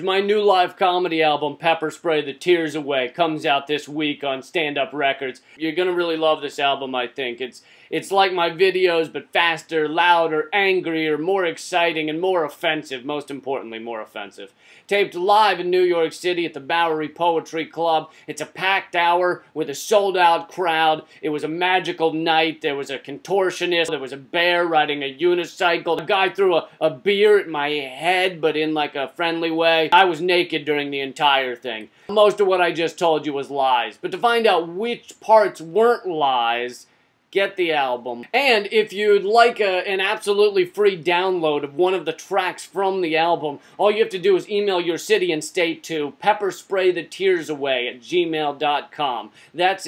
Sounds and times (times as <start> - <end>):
Speech: 0.0 - 49.8.